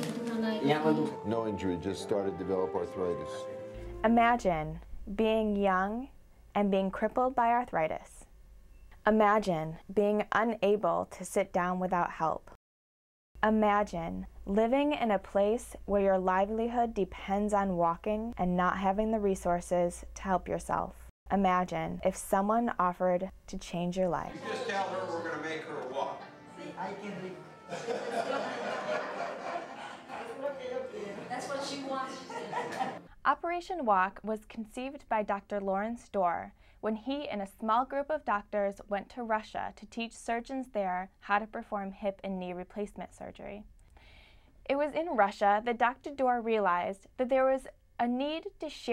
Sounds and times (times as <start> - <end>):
Speech: 0.4 - 3.4, 4.1 - 8.2, 9.1 - 12.6, 13.4 - 27.4, 33.3 - 43.6, 44.7 - 48.9.